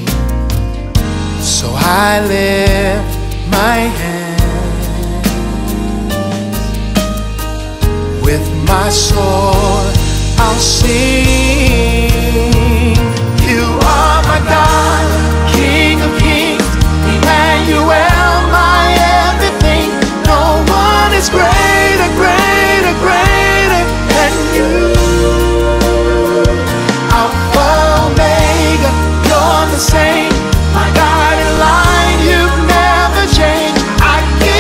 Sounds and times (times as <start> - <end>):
Music: 0.0 - 34.6.